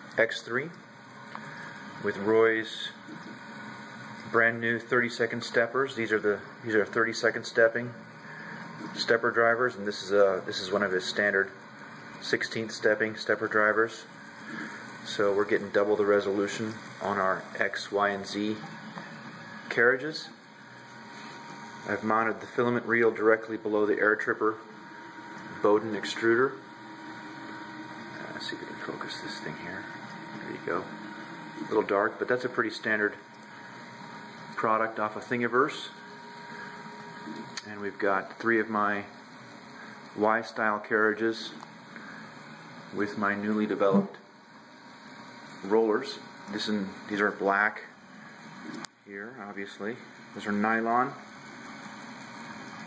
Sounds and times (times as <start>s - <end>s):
Speech: 0.2s - 0.8s, 2.0s - 3.0s, 4.2s - 8.0s, 8.9s - 11.6s, 12.2s - 14.1s, 15.1s - 18.8s, 19.7s - 20.4s, 21.9s - 24.7s, 25.5s - 26.7s, 28.2s - 31.0s, 31.6s - 33.3s, 34.6s - 36.0s, 37.6s - 39.2s, 40.2s - 41.6s, 42.9s - 44.3s, 45.6s - 48.0s, 49.1s - 51.3s.